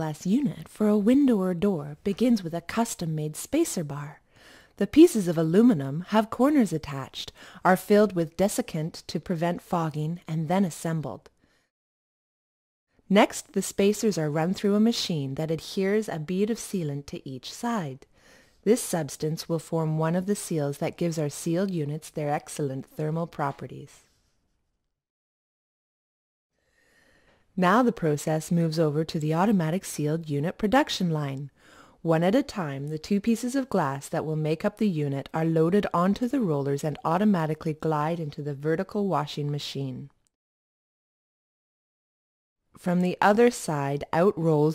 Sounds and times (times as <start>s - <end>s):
Speech: 0.0s - 4.2s, 4.8s - 11.3s, 13.1s - 18.0s, 18.6s - 24.0s, 27.6s - 40.2s, 42.8s - 44.7s.